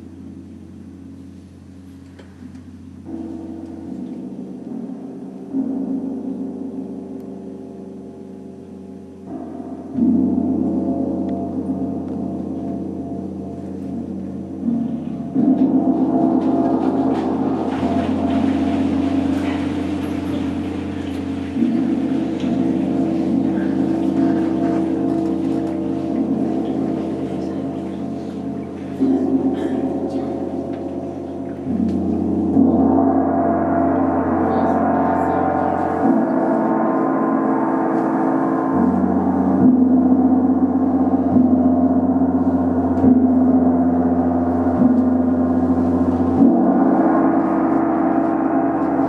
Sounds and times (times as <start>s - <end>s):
Gong: 0.0s - 49.0s.